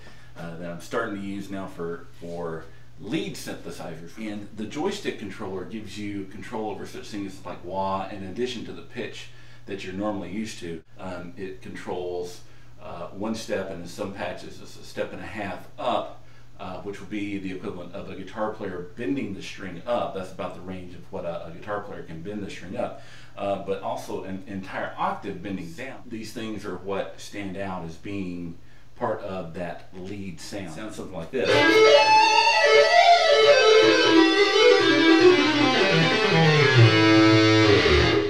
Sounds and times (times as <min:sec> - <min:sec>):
Speech: 0:00.4 - 0:32.0.